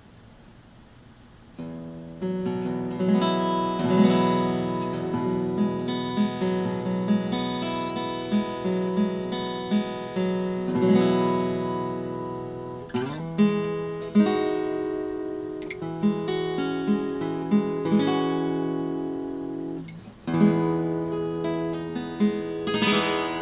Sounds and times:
Acoustic guitar: 1.5s - 23.4s.

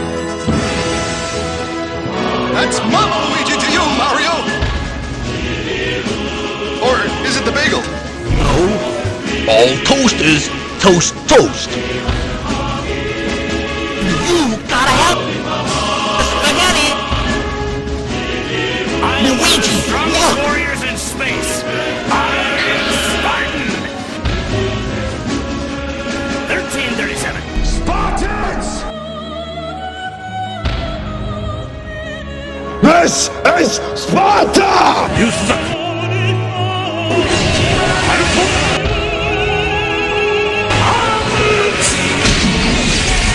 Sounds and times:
Music: 0.0s - 43.3s.

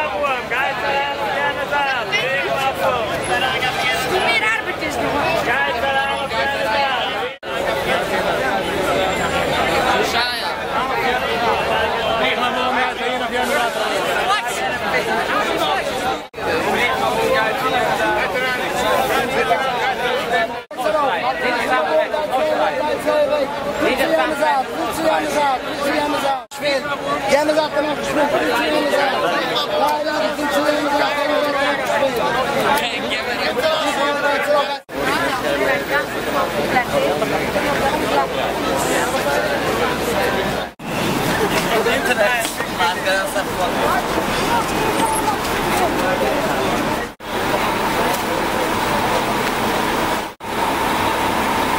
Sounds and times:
Speech: 0.0s - 50.2s.

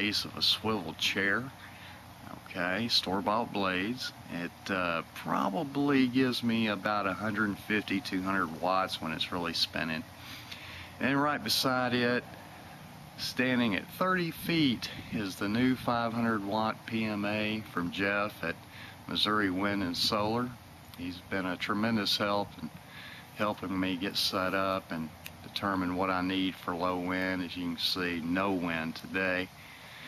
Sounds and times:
Speech: 0.0s - 1.6s, 2.2s - 10.1s, 11.0s - 12.3s, 13.2s - 22.8s, 23.4s - 29.5s.

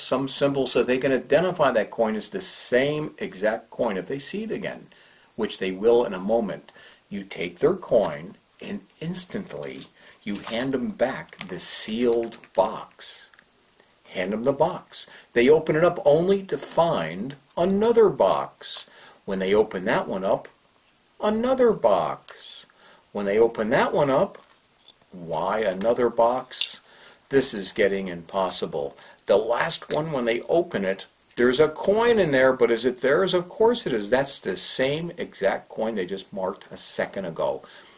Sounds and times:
Speech: 0.0s - 13.4s, 14.1s - 20.6s, 21.2s - 24.5s, 25.1s - 37.7s.

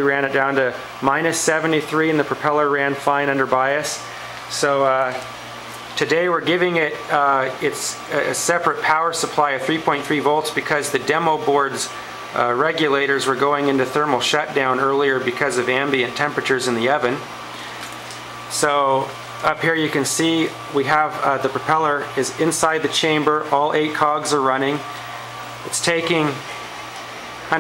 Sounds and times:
Speech: 0.0s - 5.3s, 6.0s - 17.3s, 18.5s - 24.9s, 25.6s - 26.5s.

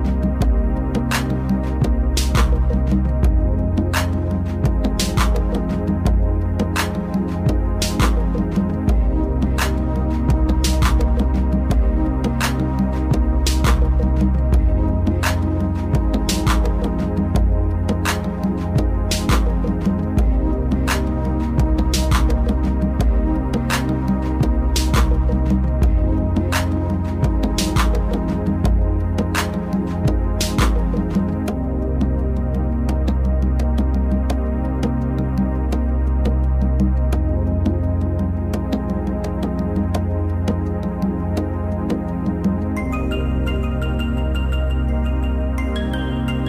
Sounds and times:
Music: 0.0s - 46.4s.

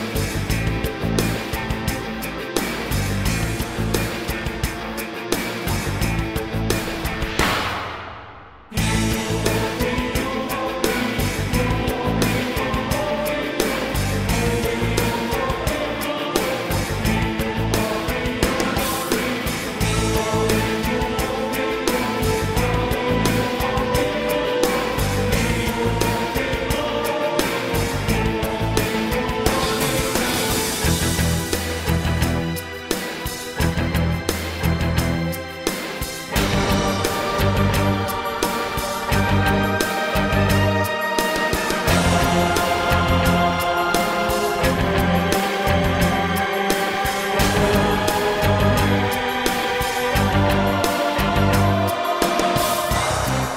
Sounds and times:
Music: 0.0s - 53.5s.

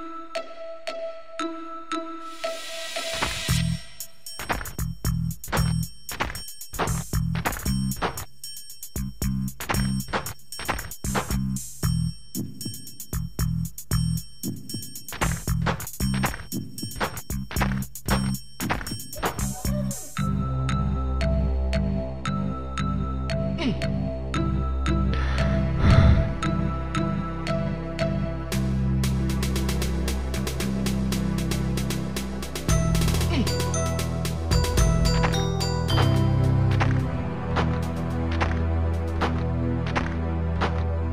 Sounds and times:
Music: 0.0s - 41.1s.

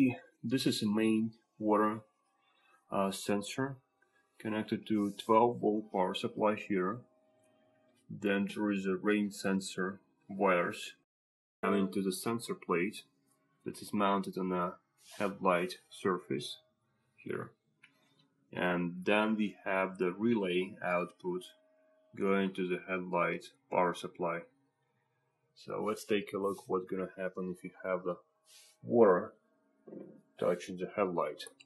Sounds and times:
Speech: 0.0s - 2.0s, 2.9s - 3.8s, 4.4s - 7.0s, 8.1s - 11.0s, 11.6s - 13.0s, 13.7s - 16.6s, 17.2s - 17.5s, 18.6s - 21.5s, 22.2s - 24.5s, 25.6s - 28.2s, 28.9s - 29.3s, 29.9s - 31.6s.

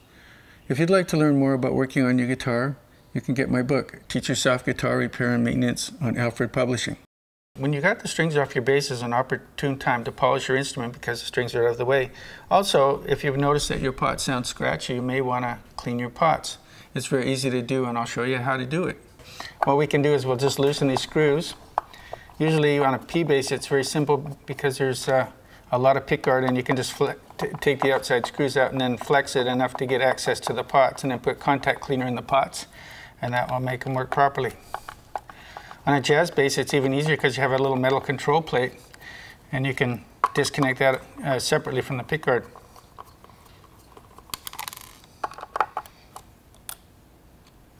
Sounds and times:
Speech: 0.7s - 21.6s, 22.4s - 34.6s, 35.8s - 38.8s, 39.5s - 42.6s.

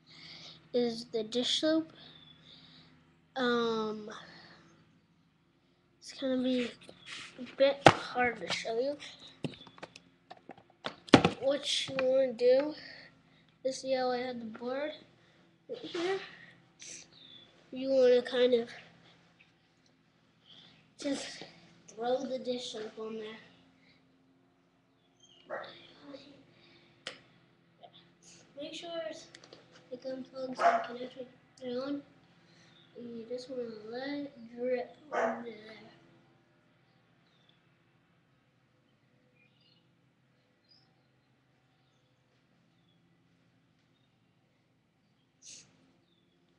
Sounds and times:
Speech: 0.3s - 2.0s, 3.4s - 4.4s, 6.0s - 9.3s, 11.3s - 13.0s, 13.7s - 15.1s, 15.7s - 17.1s, 17.7s - 18.9s, 21.0s - 23.6s, 26.0s - 26.4s, 28.4s - 32.1s, 33.0s - 36.0s.

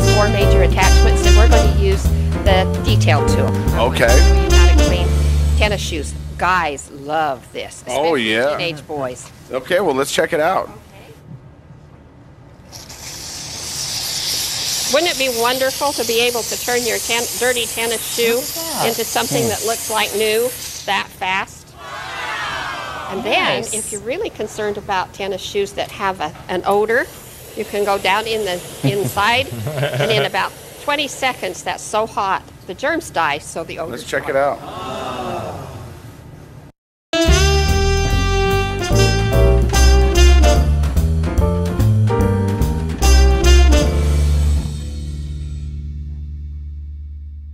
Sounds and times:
Hiss: 12.7s - 21.1s, 26.7s - 31.7s.

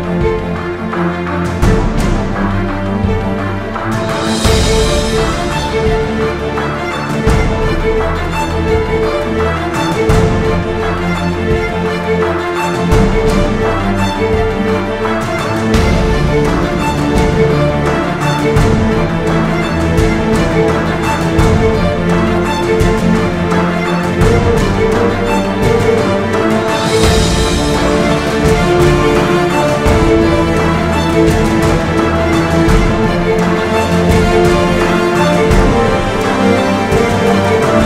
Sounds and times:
Soundtrack music: 0.0s - 37.8s.

